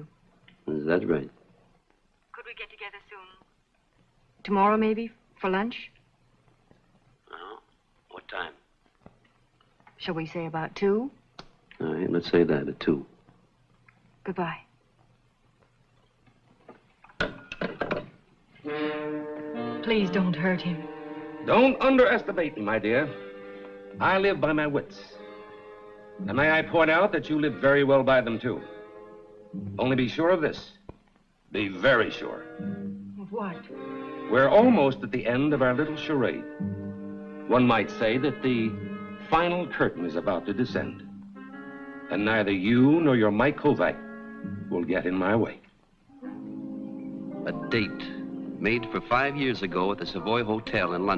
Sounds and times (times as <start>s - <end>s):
Inside, small room: 0.0s - 51.1s
Music: 11.8s - 13.3s, 17.4s - 51.1s.